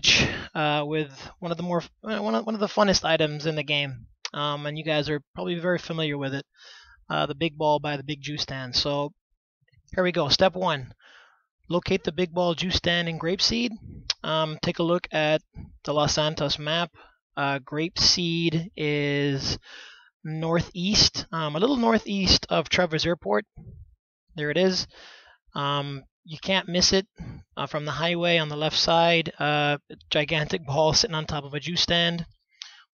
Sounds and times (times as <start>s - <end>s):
Speech: 0.0s - 6.5s, 7.1s - 9.1s, 10.0s - 11.0s, 11.7s - 19.7s, 20.3s - 23.6s, 24.4s - 25.0s, 25.6s - 32.3s.